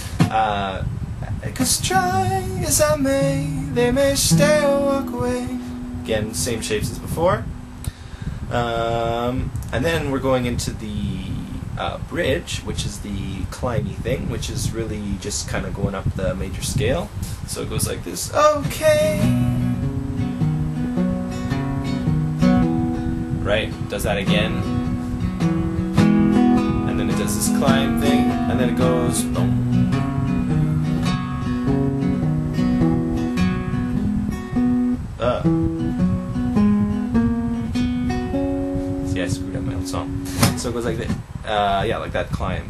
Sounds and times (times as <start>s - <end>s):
Acoustic guitar: 0.0s - 10.4s, 18.2s - 41.9s
Speech: 0.2s - 2.1s, 6.1s - 7.5s, 8.5s - 19.0s, 23.4s - 24.7s, 26.9s - 29.6s, 35.2s - 35.5s, 39.1s - 42.6s.